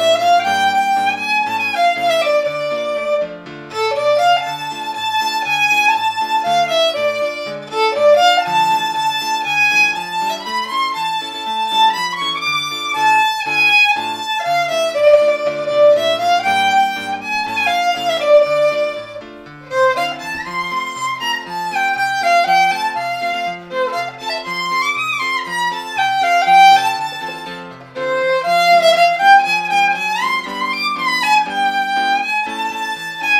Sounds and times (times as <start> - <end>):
Violin, fiddle: 0.0 - 33.3.